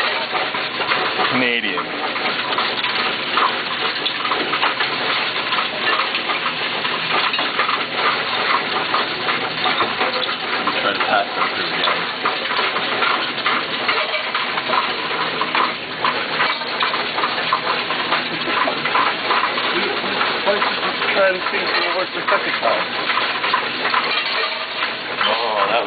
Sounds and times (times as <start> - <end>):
Speech: 1.3 - 1.9, 10.8 - 11.8, 21.2 - 22.9, 25.2 - 25.8.